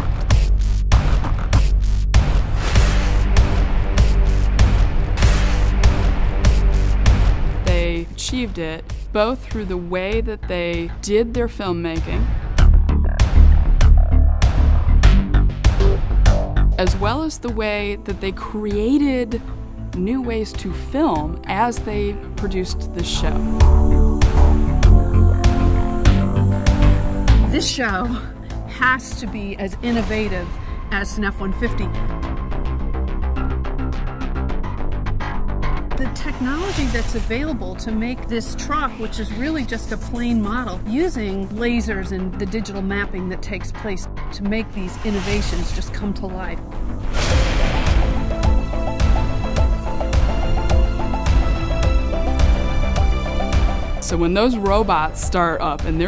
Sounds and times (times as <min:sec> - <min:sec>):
Music: 0:00.0 - 0:56.0
Speech: 0:07.7 - 0:12.3, 0:16.8 - 0:19.4, 0:20.0 - 0:23.5, 0:27.5 - 0:32.0, 0:36.0 - 0:46.6, 0:54.0 - 0:56.0.